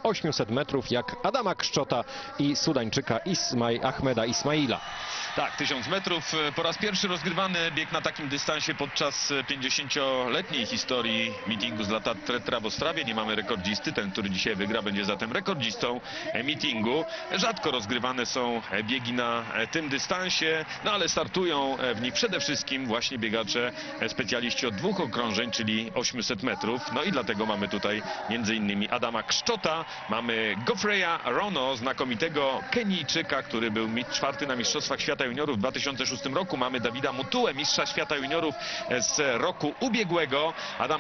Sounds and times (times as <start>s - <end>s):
Speech: 0.0s - 41.0s.